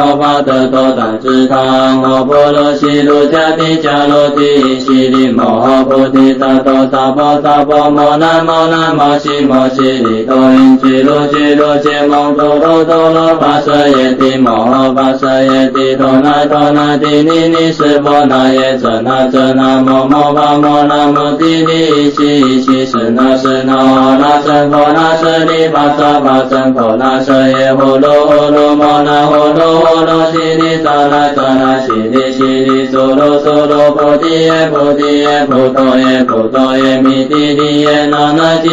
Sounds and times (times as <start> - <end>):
Mantra: 0.0 - 38.7.